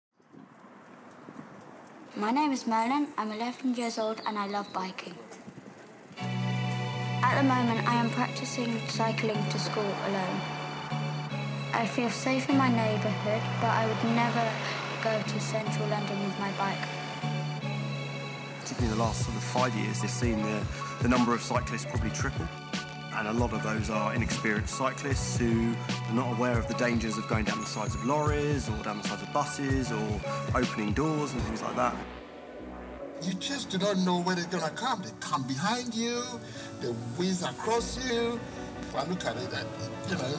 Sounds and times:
Speech: 0:02.2 - 0:05.4, 0:07.2 - 0:10.4, 0:18.7 - 0:22.5, 0:23.2 - 0:32.0, 0:33.2 - 0:40.3
Music: 0:06.1 - 0:40.3.

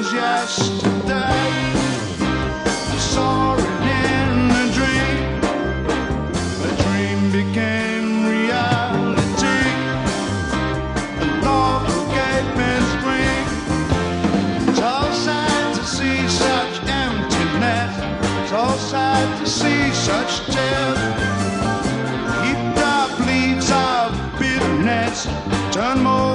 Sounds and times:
Music: 0:00.0 - 0:26.3.

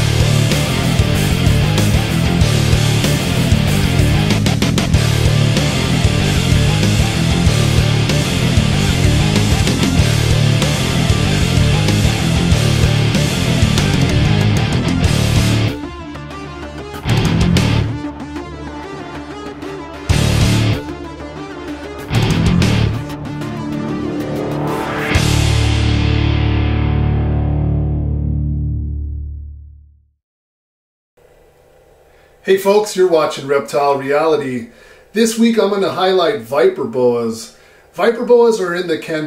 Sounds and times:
Music: 0:00.0 - 0:30.2.

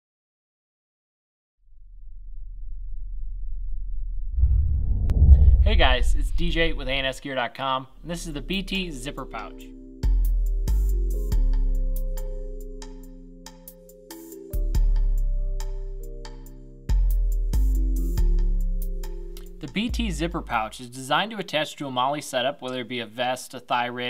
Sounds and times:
Speech: 0:05.6 - 0:09.7, 0:19.6 - 0:24.0.

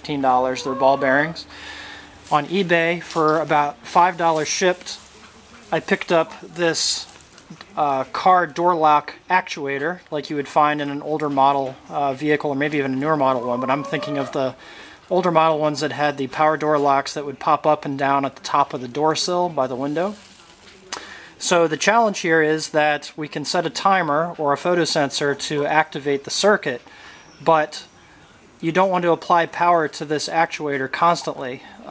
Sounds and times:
Speech: 0:00.0 - 0:01.6, 0:02.2 - 0:31.9.

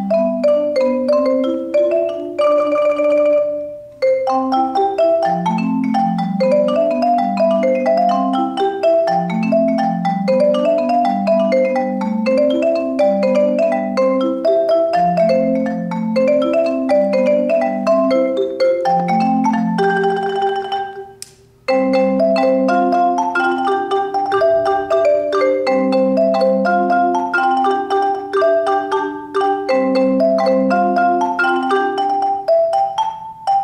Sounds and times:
Percussion: 0:00.0 - 0:33.6.

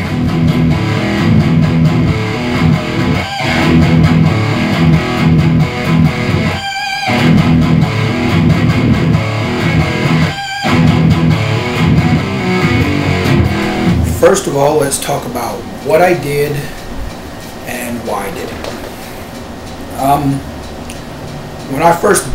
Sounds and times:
Electric guitar: 0:00.0 - 0:17.6
Strum: 0:00.0 - 0:20.3
Speech: 0:14.2 - 0:16.8, 0:17.6 - 0:18.8, 0:19.9 - 0:20.5, 0:21.7 - 0:22.3.

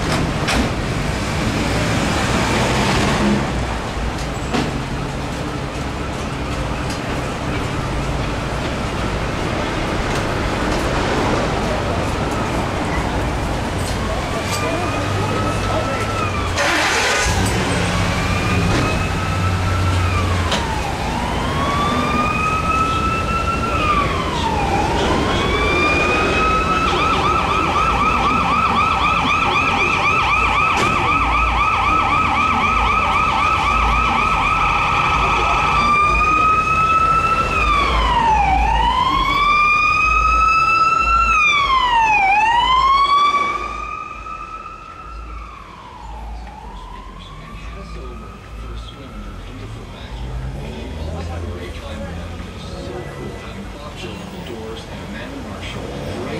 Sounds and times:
Fire engine, fire truck (siren): 0:00.0 - 0:56.3
Police car (siren): 0:11.8 - 0:51.6.

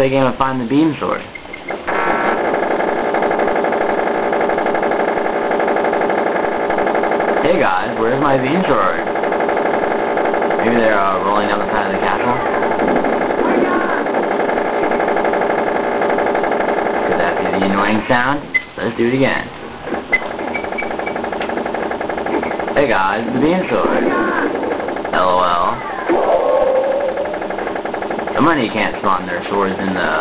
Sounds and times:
Speech: 0:00.0 - 0:01.3, 0:07.4 - 0:09.0, 0:10.6 - 0:12.7, 0:17.1 - 0:19.5, 0:22.8 - 0:24.4, 0:25.2 - 0:25.8, 0:28.4 - 0:30.2.

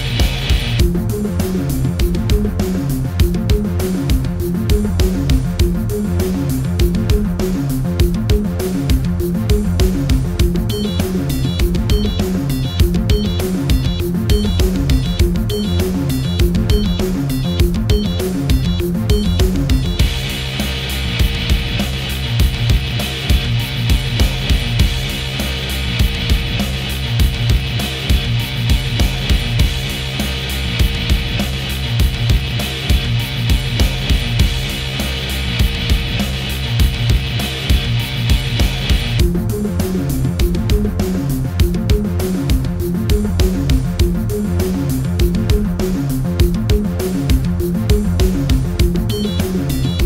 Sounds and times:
Exciting music: 0:00.0 - 0:50.0.

